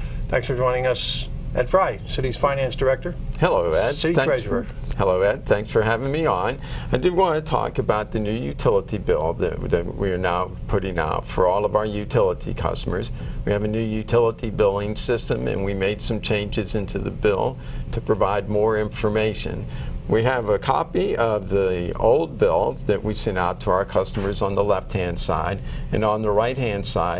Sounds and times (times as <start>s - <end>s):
Speech: 0.3s - 27.1s.